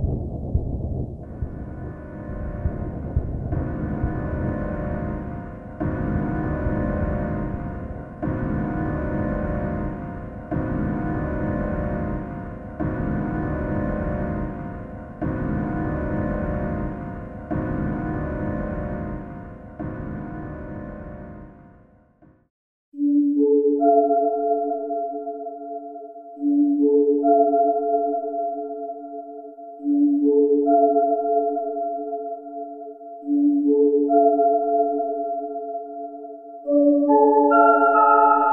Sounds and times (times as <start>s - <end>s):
Music: 1.2s - 38.5s.